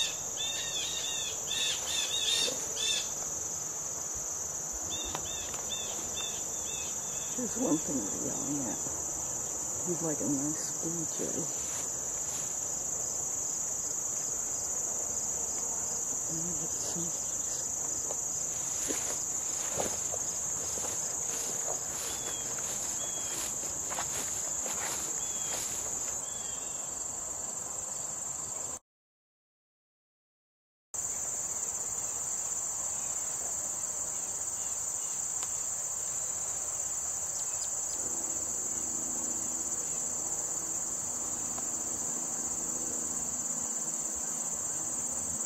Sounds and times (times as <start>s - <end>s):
Insect: 0.0s - 28.8s, 31.0s - 45.4s
Speech: 7.4s - 8.9s, 9.9s - 11.6s, 16.3s - 17.6s.